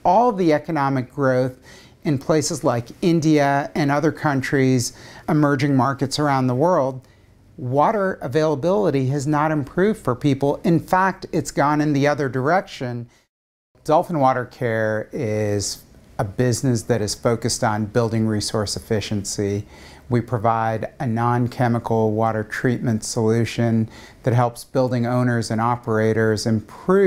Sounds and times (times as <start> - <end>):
Speech: 0.0 - 7.0, 7.6 - 13.1, 13.8 - 27.0.